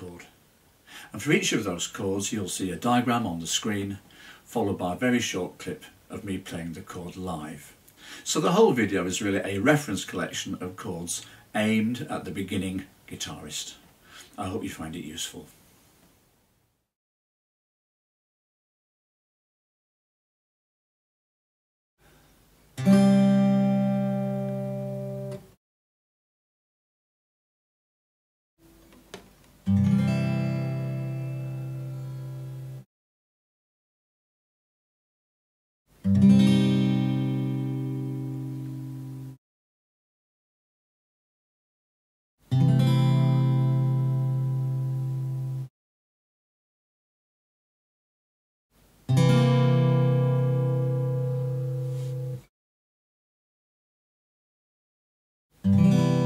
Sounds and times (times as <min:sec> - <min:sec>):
Speech: 0:00.0 - 0:00.4, 0:01.1 - 0:15.6.